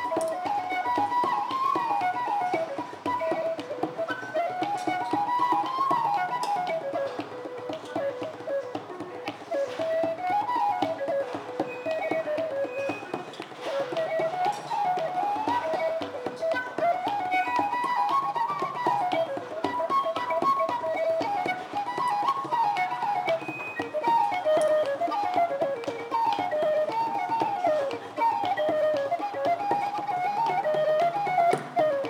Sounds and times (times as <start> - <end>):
Whistle: 0.0 - 32.1.